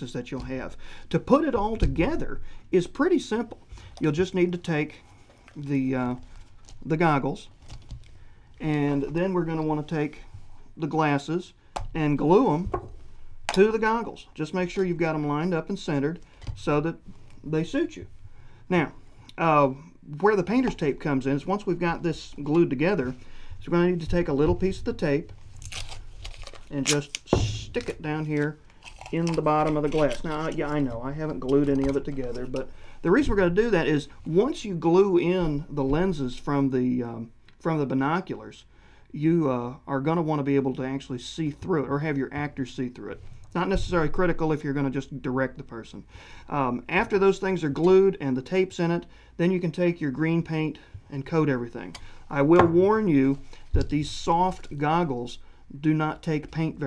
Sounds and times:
Speech: 0.0s - 5.0s, 5.6s - 6.2s, 6.8s - 7.5s, 8.6s - 10.2s, 10.8s - 12.8s, 13.5s - 18.1s, 18.7s - 25.3s, 26.7s - 56.8s.

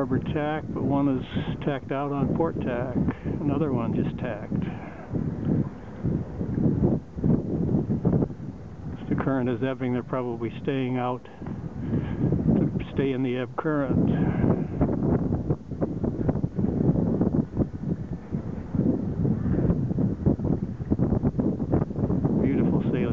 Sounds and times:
Speech: 0.0s - 4.9s, 9.0s - 11.3s, 12.6s - 14.4s, 22.4s - 23.1s
Boat, Water vehicle: 0.0s - 23.1s.

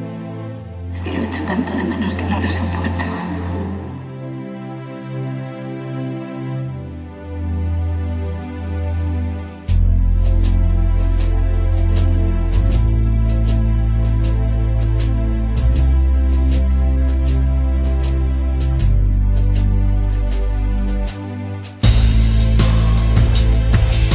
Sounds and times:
Music: 0.0s - 24.1s.

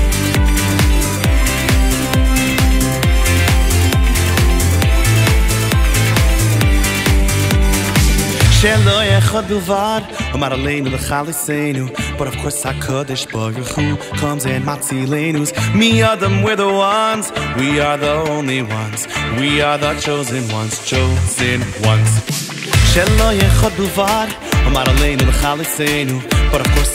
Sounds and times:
Music: 0.0s - 26.9s.

